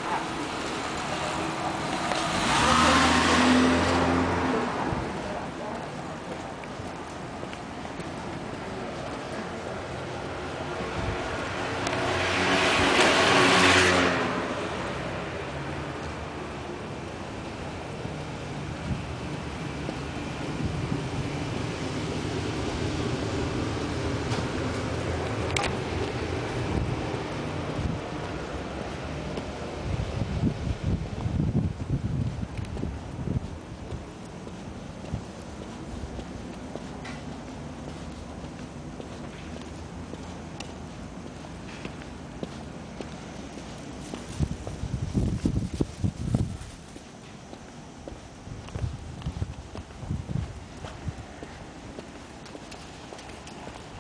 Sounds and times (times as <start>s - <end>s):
Walk, footsteps: 5.8s - 9.4s, 18.8s - 20.1s, 28.2s - 29.6s, 32.2s - 54.0s.